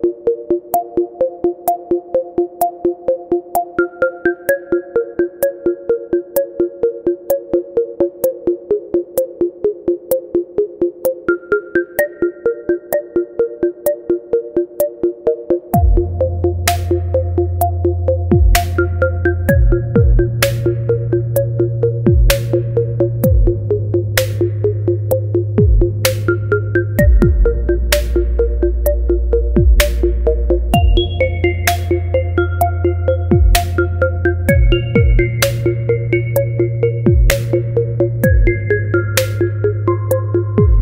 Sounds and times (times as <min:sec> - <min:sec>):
Synthesizer: 0:00.0 - 0:40.8.